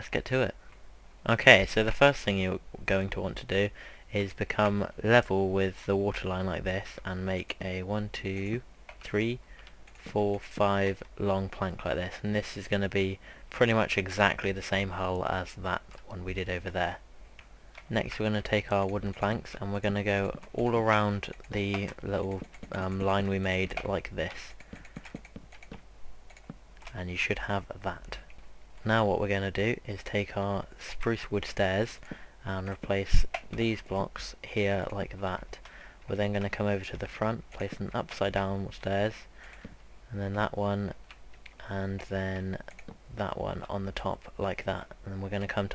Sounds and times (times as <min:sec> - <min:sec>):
Speech: 0:00.0 - 0:00.6, 0:01.2 - 0:09.4, 0:10.0 - 0:17.0, 0:17.9 - 0:24.6, 0:26.9 - 0:39.3, 0:40.1 - 0:41.0, 0:41.6 - 0:45.7.